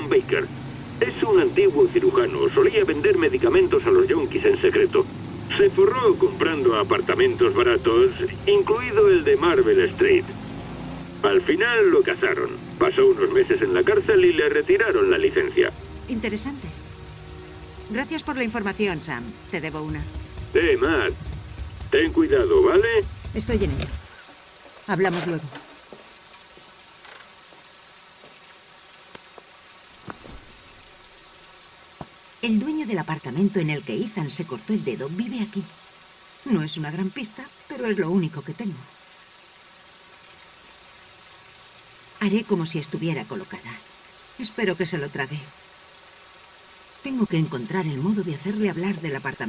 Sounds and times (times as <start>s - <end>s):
Speech: 0.0s - 10.3s, 11.2s - 16.8s, 17.9s - 21.2s, 21.9s - 24.0s, 24.9s - 25.6s, 32.4s - 35.8s, 36.4s - 38.9s, 42.2s - 43.8s, 44.4s - 45.5s, 47.0s - 49.4s
Rain on surface: 0.0s - 49.4s.